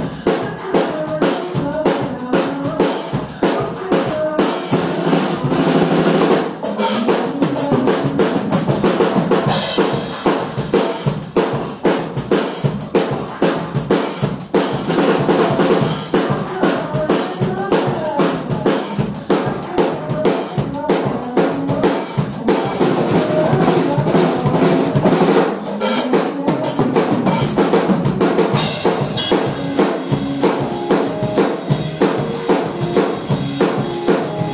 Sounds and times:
Music: 0.0s - 34.5s.

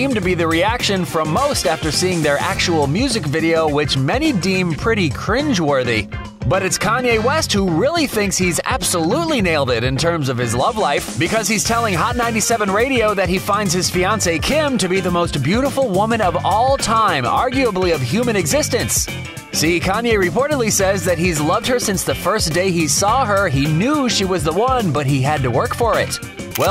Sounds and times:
Music: 0.0s - 26.7s
Speech: 0.0s - 26.7s.

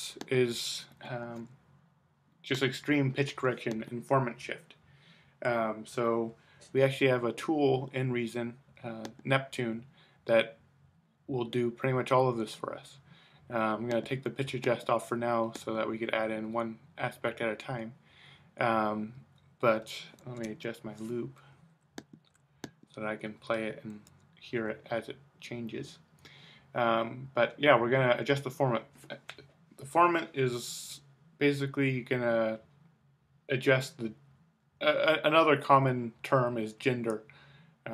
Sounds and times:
Speech: 0.0s - 1.6s, 2.4s - 4.8s, 5.4s - 10.6s, 11.3s - 18.0s, 18.6s - 21.4s, 23.0s - 26.0s, 26.8s - 32.7s, 33.5s - 34.2s, 34.8s - 37.3s.

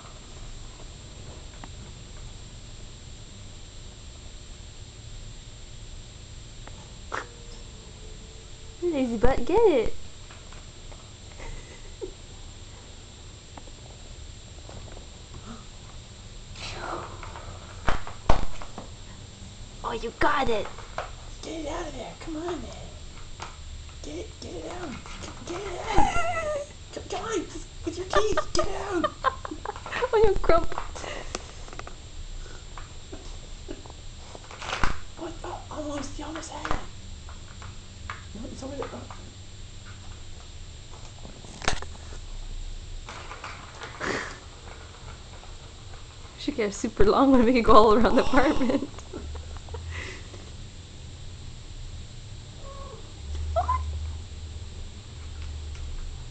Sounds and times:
Speech: 8.8s - 10.0s, 19.9s - 20.7s, 21.4s - 23.0s, 24.0s - 25.7s, 27.0s - 29.1s, 35.2s - 36.8s, 38.4s - 39.2s.

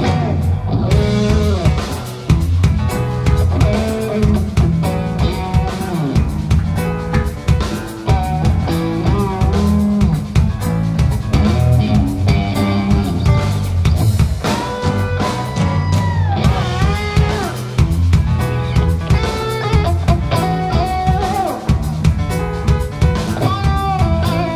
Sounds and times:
Electric guitar: 0.0s - 24.5s.

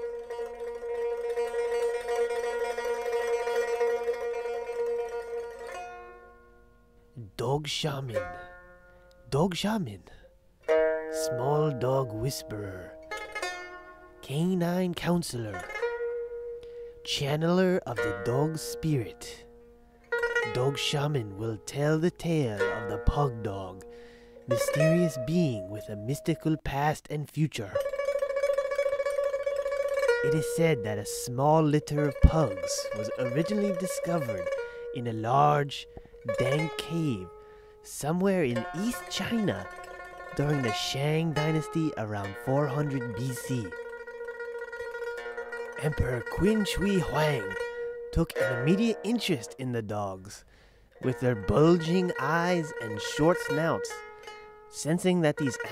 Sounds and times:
Music: 0.0s - 7.4s, 8.0s - 9.4s, 10.1s - 26.8s, 27.6s - 55.7s
Speech: 7.2s - 8.5s, 9.3s - 10.2s, 11.2s - 13.0s, 14.2s - 15.7s, 17.1s - 19.5s, 20.5s - 23.8s, 24.5s - 27.9s, 30.2s - 39.7s, 40.3s - 43.8s, 45.8s - 50.4s, 51.0s - 54.0s, 54.8s - 55.7s.

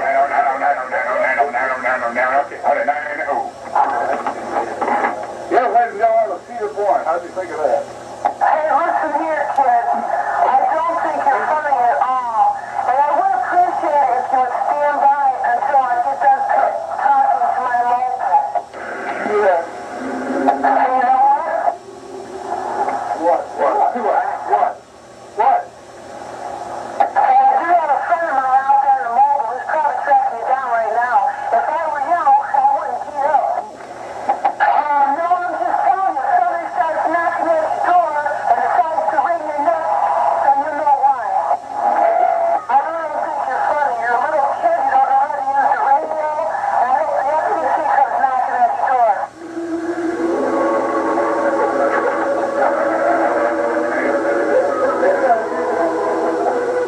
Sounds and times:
Speech: 0.0s - 4.8s, 42.7s - 49.3s
Radio: 0.0s - 56.8s.

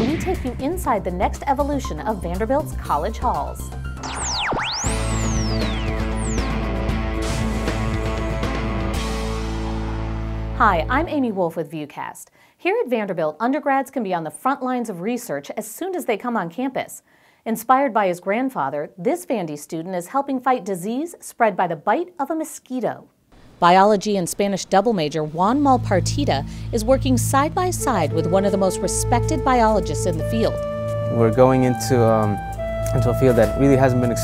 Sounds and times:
Speech: 0.0s - 3.6s, 10.6s - 30.5s, 31.1s - 34.2s
Music: 0.0s - 11.4s, 24.4s - 34.2s.

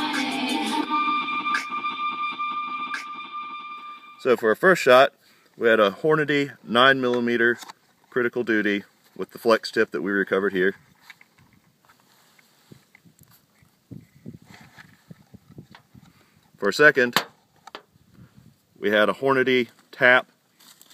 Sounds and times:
Speech: 4.2s - 10.8s, 16.6s - 17.2s, 18.8s - 20.3s.

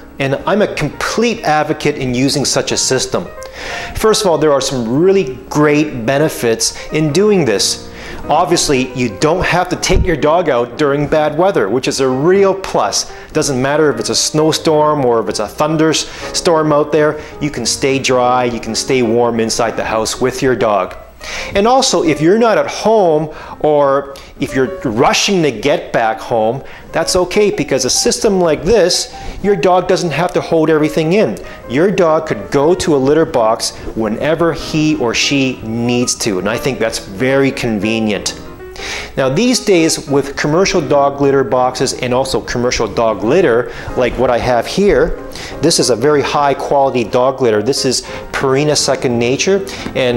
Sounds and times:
Music: 0.0s - 50.1s
Speech: 0.2s - 3.3s, 4.0s - 21.0s, 21.6s - 38.4s, 39.2s - 50.1s.

